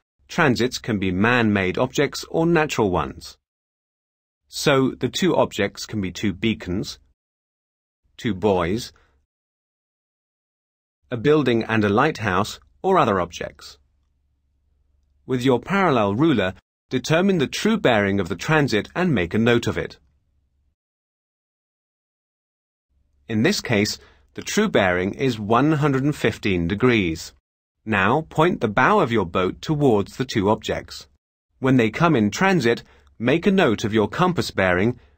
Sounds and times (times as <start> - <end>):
Speech: 0.3 - 3.4, 4.5 - 7.1, 8.2 - 9.0, 11.1 - 13.8, 15.3 - 20.0, 23.3 - 35.0.